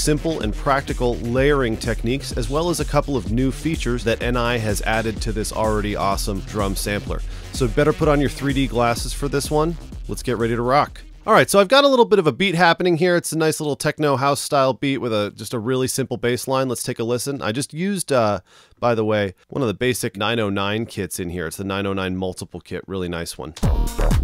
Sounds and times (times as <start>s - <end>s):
Music: 0.0s - 11.7s, 23.6s - 24.2s
Speech: 0.0s - 23.6s.